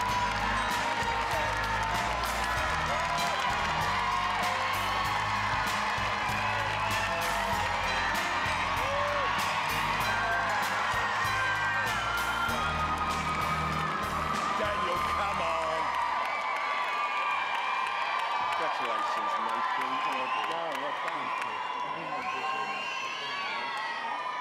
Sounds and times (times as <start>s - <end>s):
Music: 0.0s - 16.3s.